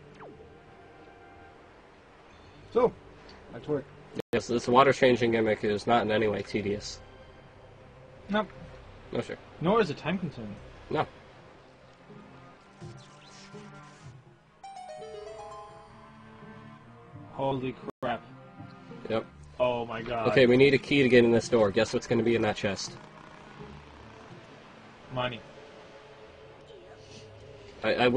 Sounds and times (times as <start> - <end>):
Music: 0.0 - 28.1
Speech: 4.4 - 7.0, 19.1 - 23.0, 27.8 - 28.1.